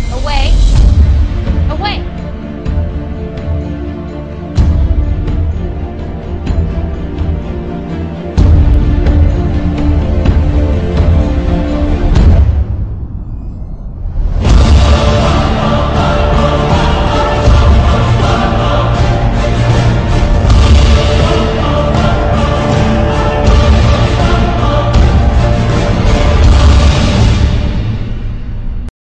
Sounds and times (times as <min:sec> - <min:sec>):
Music: 0:00.0 - 0:28.9.